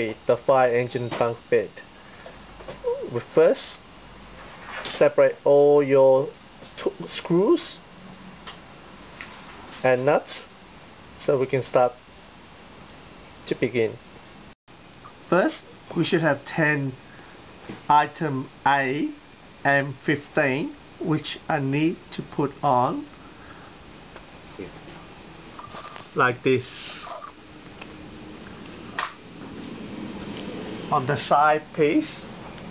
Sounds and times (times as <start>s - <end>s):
Speech: 0.0s - 1.9s, 2.8s - 3.8s, 4.8s - 7.8s, 9.8s - 10.5s, 11.2s - 12.0s, 13.5s - 14.0s, 15.3s - 17.0s, 17.9s - 23.1s, 24.6s - 24.8s, 26.2s - 27.1s, 30.9s - 32.3s.